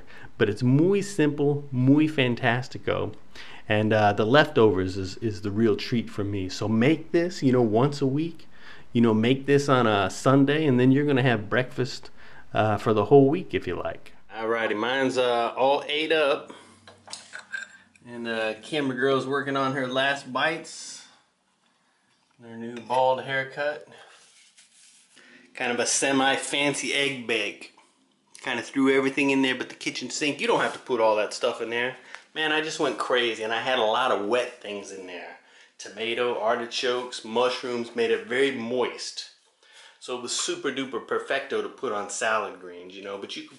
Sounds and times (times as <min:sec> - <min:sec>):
Speech: 0:00.0 - 0:16.6, 0:18.0 - 0:21.1, 0:22.4 - 0:24.0, 0:25.6 - 0:27.8, 0:28.4 - 0:39.4, 0:40.0 - 0:43.5
Inside, small room: 0:00.0 - 0:43.5.